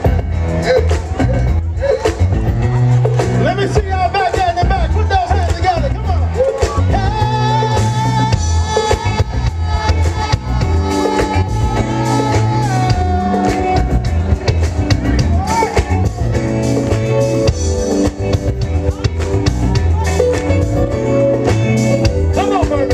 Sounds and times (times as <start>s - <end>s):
Music: 0.0s - 22.9s.